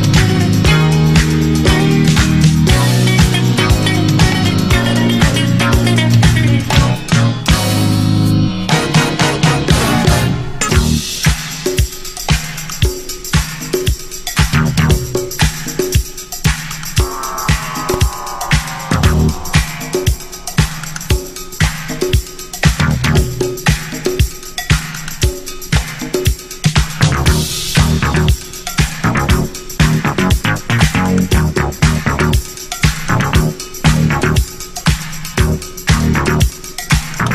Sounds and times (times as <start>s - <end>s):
Disco: 0.0s - 37.3s
Funk: 14.4s - 15.7s, 25.2s - 34.6s, 35.4s - 37.3s.